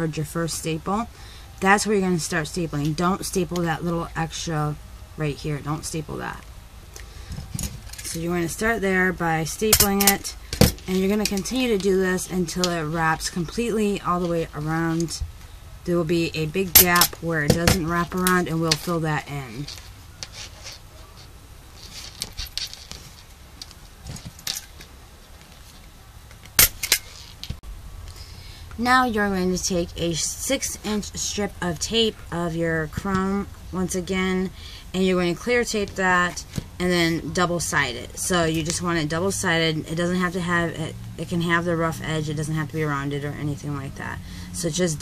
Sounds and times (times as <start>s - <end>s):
Speech: 0.0s - 6.5s, 8.0s - 19.8s, 28.8s - 45.0s.